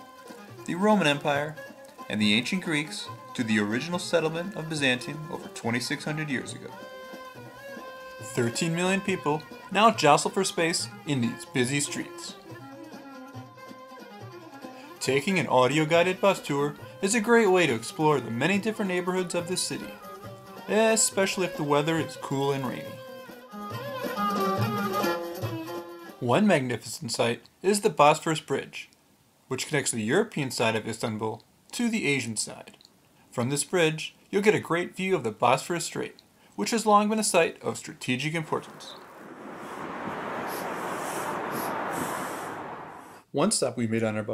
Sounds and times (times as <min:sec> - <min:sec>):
Music: 0:00.0 - 0:26.4
Speech: 0:00.7 - 0:06.8, 0:08.2 - 0:12.4, 0:15.0 - 0:20.0, 0:20.7 - 0:23.0, 0:26.2 - 0:28.9, 0:29.5 - 0:39.0, 0:43.3 - 0:44.3.